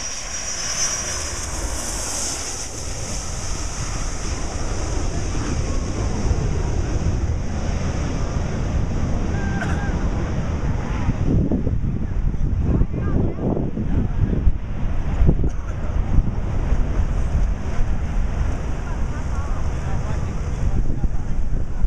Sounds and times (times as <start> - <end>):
Fixed-wing aircraft, airplane: 0.0 - 21.8.